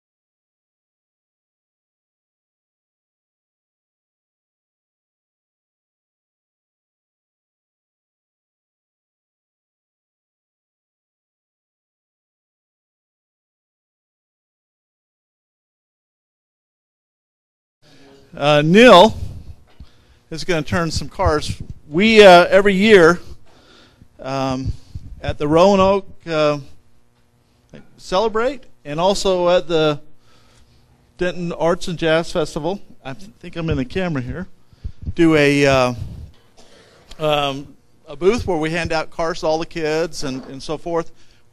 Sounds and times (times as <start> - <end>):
Speech: 17.9 - 19.2, 20.3 - 23.4, 24.2 - 26.8, 27.7 - 30.1, 31.2 - 34.5, 35.1 - 36.2, 37.2 - 41.2.